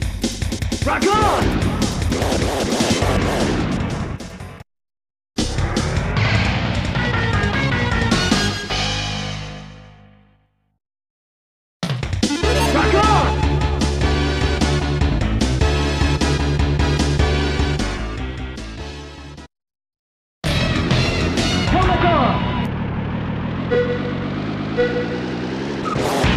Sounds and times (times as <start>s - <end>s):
Music: 0.0s - 4.6s, 5.4s - 10.7s, 11.8s - 19.5s, 20.4s - 22.7s
Speech: 0.8s - 1.5s, 12.4s - 13.4s, 21.7s - 22.5s.